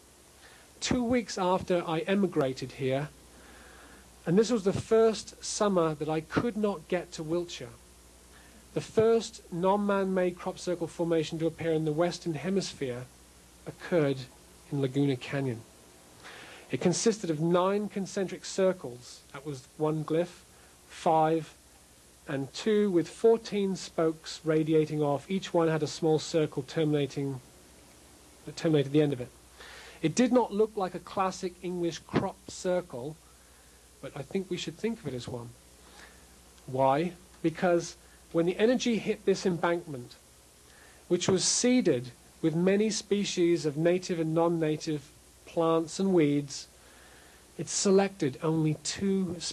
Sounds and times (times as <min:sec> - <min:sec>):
Speech: 0:00.8 - 0:03.2, 0:04.2 - 0:07.8, 0:08.7 - 0:15.7, 0:16.7 - 0:21.6, 0:22.2 - 0:27.4, 0:28.4 - 0:29.3, 0:30.0 - 0:33.2, 0:34.0 - 0:35.6, 0:36.6 - 0:40.2, 0:41.1 - 0:46.7, 0:47.6 - 0:49.5.